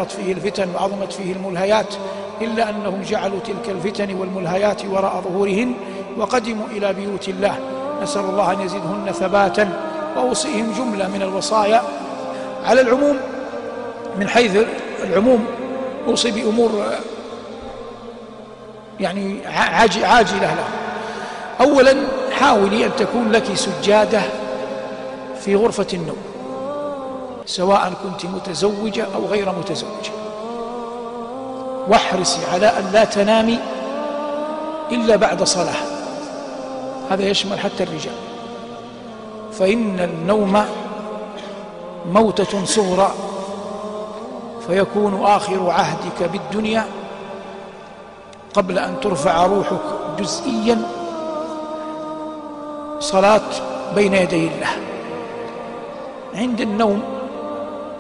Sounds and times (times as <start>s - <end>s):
Speech: 0.0s - 11.9s, 12.6s - 13.2s, 14.2s - 17.1s, 19.0s - 20.7s, 21.6s - 24.4s, 25.4s - 26.3s, 27.5s - 30.2s, 31.9s - 33.6s, 34.9s - 36.0s, 37.1s - 38.2s, 39.6s - 40.8s, 42.1s - 43.2s, 44.6s - 46.9s, 48.6s - 50.9s, 53.0s - 54.9s, 56.4s - 57.1s
Music: 0.0s - 58.0s.